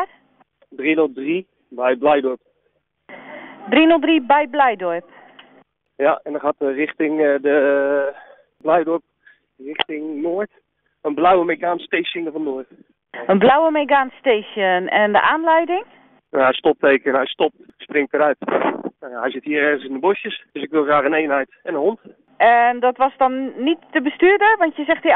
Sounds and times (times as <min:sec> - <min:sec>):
Speech: 0:00.8 - 0:02.4, 0:06.0 - 0:09.0, 0:09.6 - 0:10.5, 0:11.1 - 0:15.8, 0:16.4 - 0:18.4, 0:19.0 - 0:25.1.